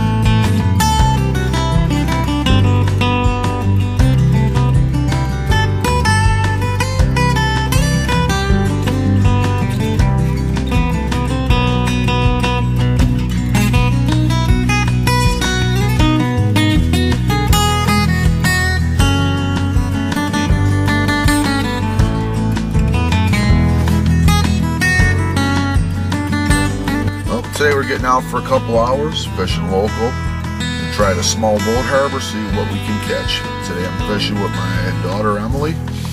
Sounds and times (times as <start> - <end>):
Music: 0.0 - 36.1.